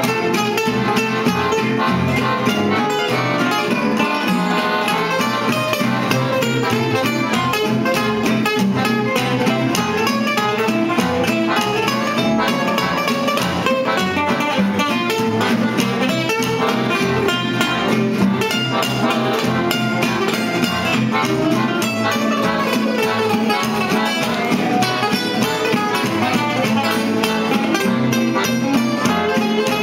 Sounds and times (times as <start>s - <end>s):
Blues: 0.0s - 29.8s
Guitar: 0.0s - 29.8s.